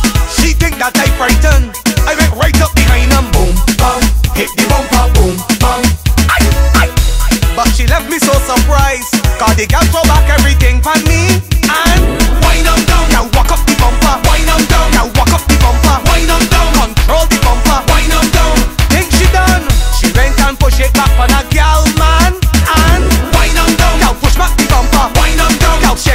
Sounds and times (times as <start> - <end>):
Afrobeat: 0.0 - 26.1.